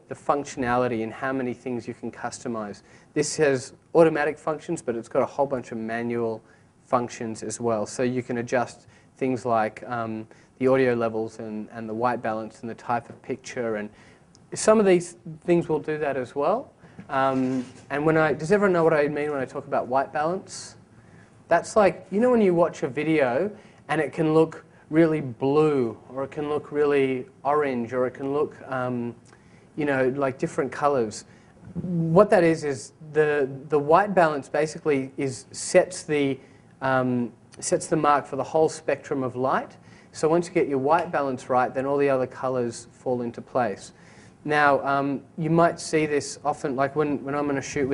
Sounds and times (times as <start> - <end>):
Speech: 0.0 - 20.8, 21.5 - 47.9.